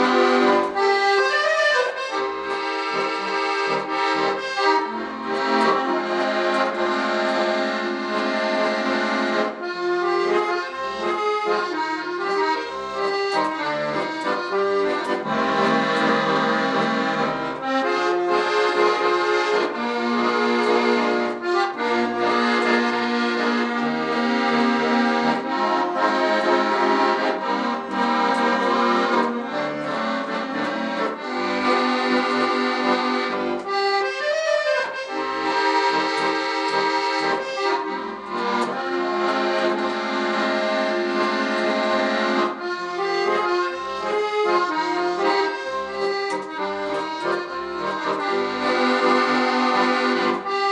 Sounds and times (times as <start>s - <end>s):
Musical instrument: 0.0s - 50.7s.